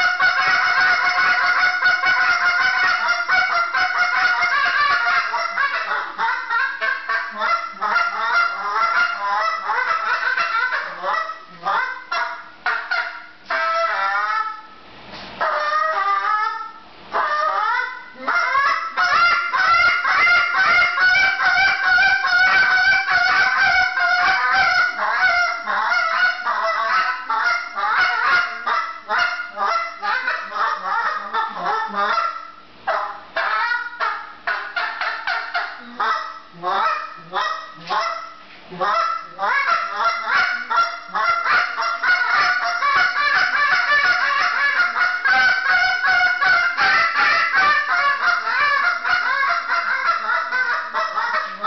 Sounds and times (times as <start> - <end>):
Honk: 0.0 - 14.6, 15.4 - 51.6.